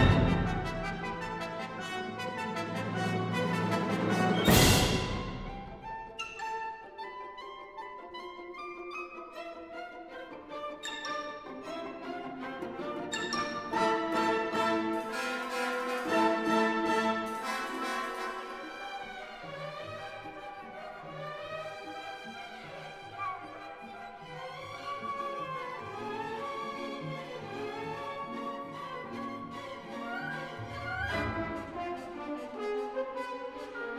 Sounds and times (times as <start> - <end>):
Music: 0.0 - 33.9.